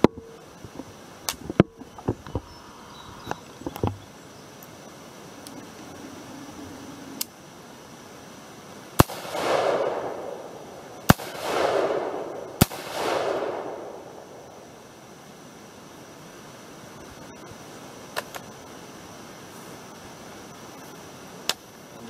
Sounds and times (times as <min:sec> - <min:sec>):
Outside, rural or natural: 0:00.0 - 0:22.1.